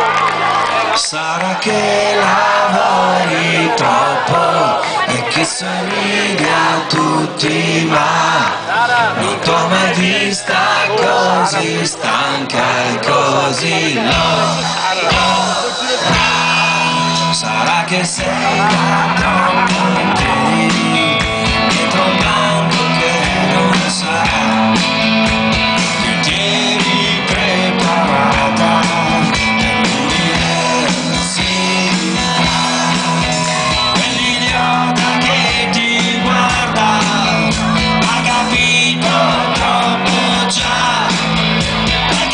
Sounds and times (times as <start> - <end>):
Music: 0.0 - 42.3.